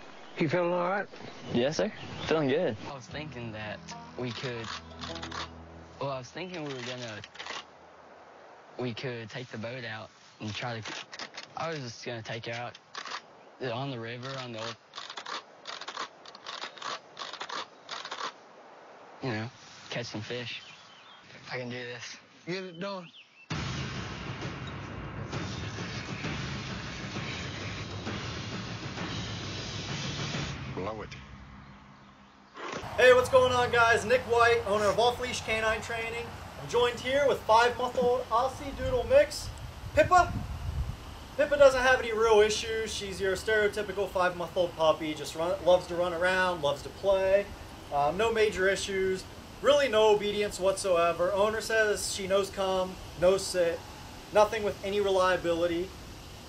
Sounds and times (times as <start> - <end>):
Speech: 0.4 - 4.8, 6.0 - 7.3, 8.8 - 10.9, 11.6 - 12.8, 13.6 - 14.8, 19.2 - 20.6, 33.0 - 40.4, 41.4 - 53.8, 54.4 - 55.9.